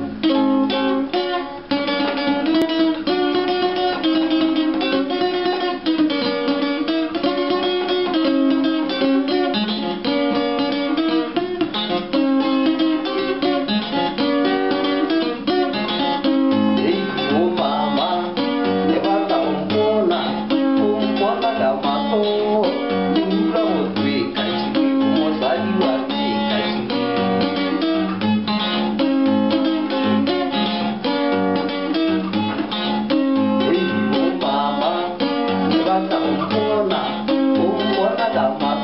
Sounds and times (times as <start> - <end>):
Acoustic guitar: 0.0 - 38.8.